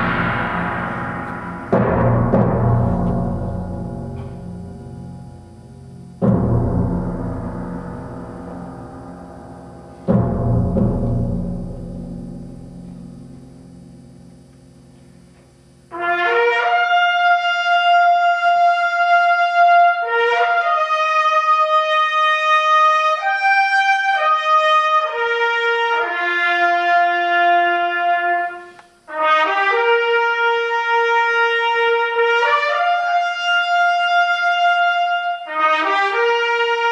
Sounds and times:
Timpani: 0:00.0 - 0:36.9.

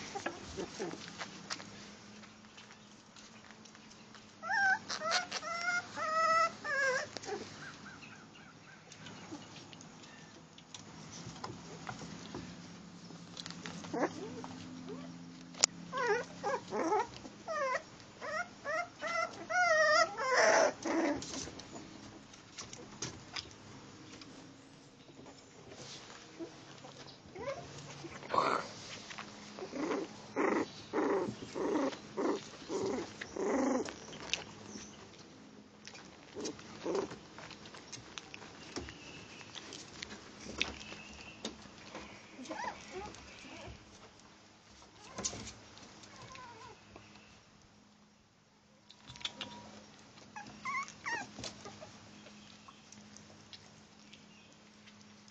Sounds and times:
Growling: 0:27.4 - 0:28.8, 0:29.6 - 0:33.9.

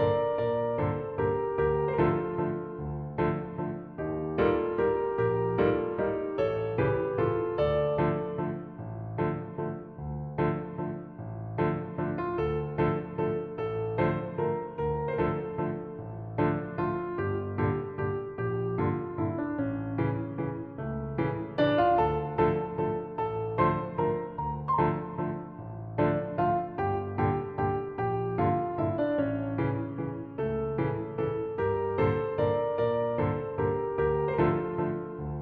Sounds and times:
Music: 0:00.0 - 0:35.4.

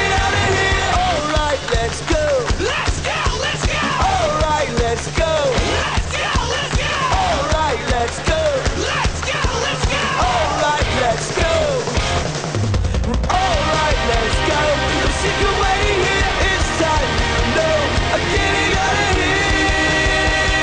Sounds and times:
Pop music: 0:00.0 - 0:20.6.

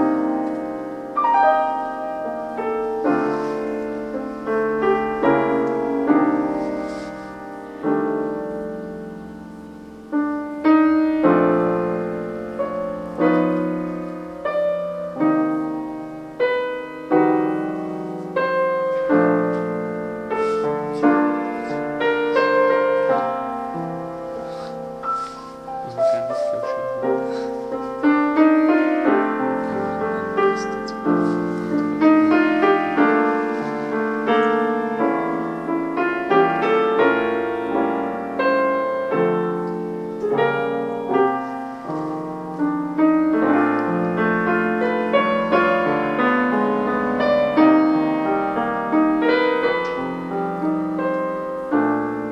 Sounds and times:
Music: 0:00.0 - 0:52.3
Speech: 0:25.8 - 0:27.1.

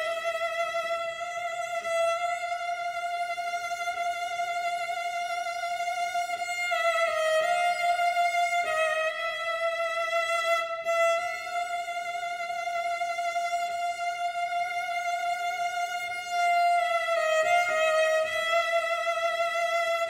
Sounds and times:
Violin, fiddle: 0:00.0 - 0:20.1.

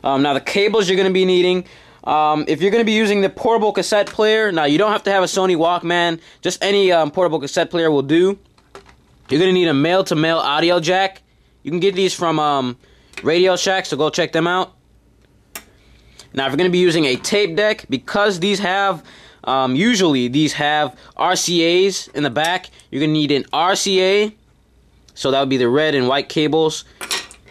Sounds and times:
Speech: 0:00.0 - 0:08.4, 0:09.3 - 0:14.8, 0:16.3 - 0:24.4, 0:25.1 - 0:26.9.

